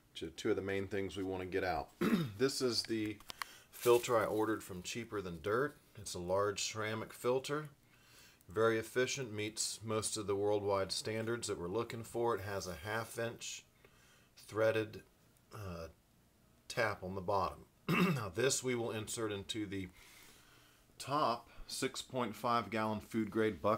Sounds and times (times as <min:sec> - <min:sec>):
Speech: 0:00.1 - 0:03.2, 0:03.8 - 0:07.8, 0:08.5 - 0:13.7, 0:14.4 - 0:16.0, 0:16.7 - 0:20.0, 0:21.0 - 0:23.7.